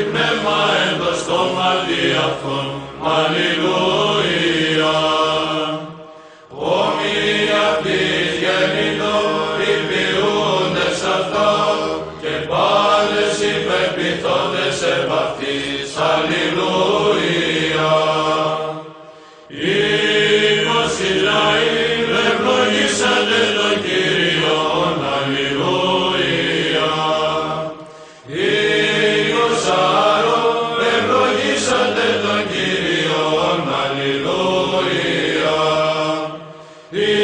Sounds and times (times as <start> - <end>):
Chant: 0.0 - 37.2.